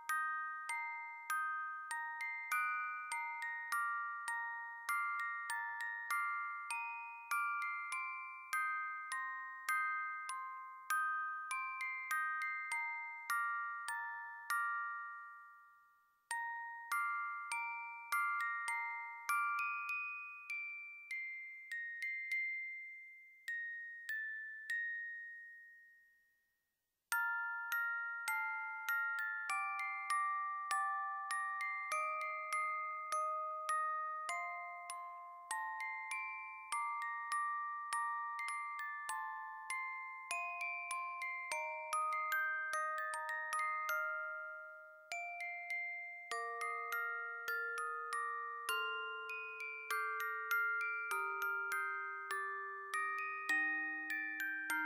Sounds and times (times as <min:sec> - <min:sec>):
Music: 0:00.0 - 0:54.8.